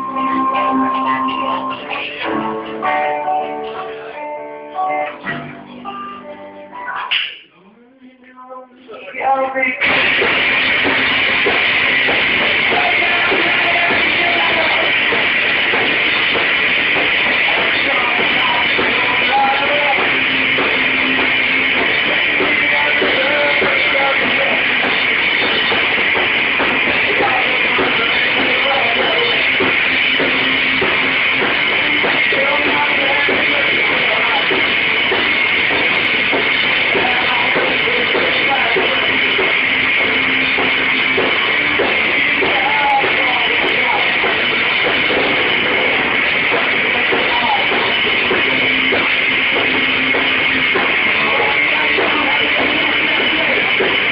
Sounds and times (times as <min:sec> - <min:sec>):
Music: 0:00.0 - 0:54.1.